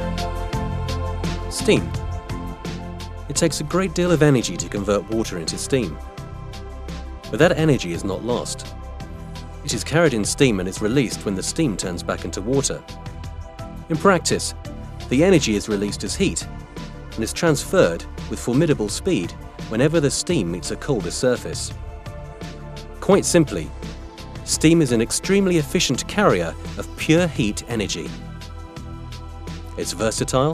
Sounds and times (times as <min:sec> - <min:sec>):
Music: 0:00.0 - 0:30.5
Speech: 0:01.5 - 0:01.9, 0:03.3 - 0:06.0, 0:07.3 - 0:08.7, 0:09.7 - 0:12.8, 0:13.9 - 0:16.5, 0:17.2 - 0:21.7, 0:23.0 - 0:23.7, 0:24.5 - 0:28.2, 0:29.8 - 0:30.5.